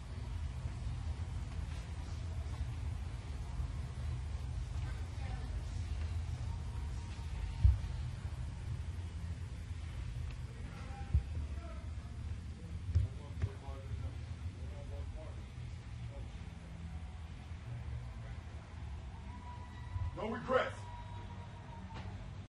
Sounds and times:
Male speech, man speaking: 10.6 - 15.6, 20.2 - 20.9.

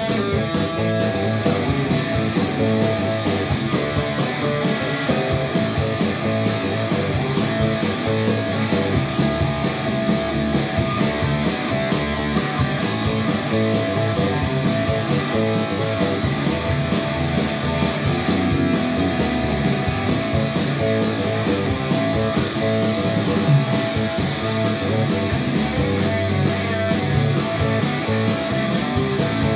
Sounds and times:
Electric guitar: 0.0 - 29.5.

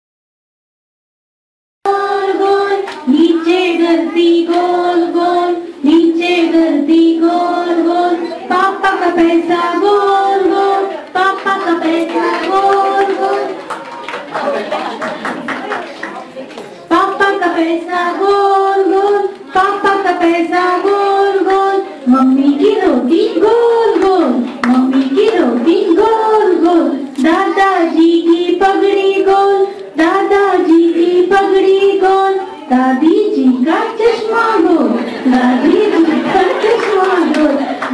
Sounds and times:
Singing: 1.9 - 14.2, 16.9 - 37.9
Speech: 14.2 - 20.3, 21.4 - 37.9.

